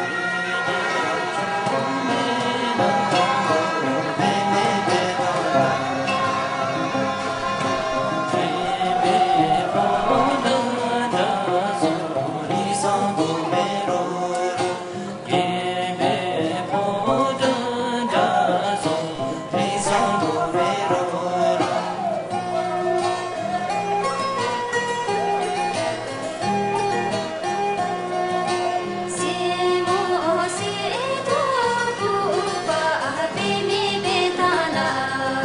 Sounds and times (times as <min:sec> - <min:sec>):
Vocal music: 0:00.0 - 0:35.4.